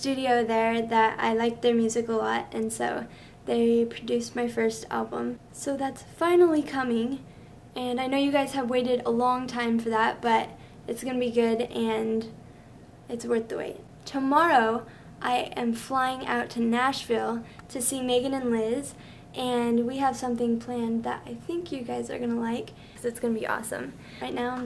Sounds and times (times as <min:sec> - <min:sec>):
Speech: 0:00.0 - 0:07.2, 0:07.8 - 0:12.4, 0:13.1 - 0:24.6.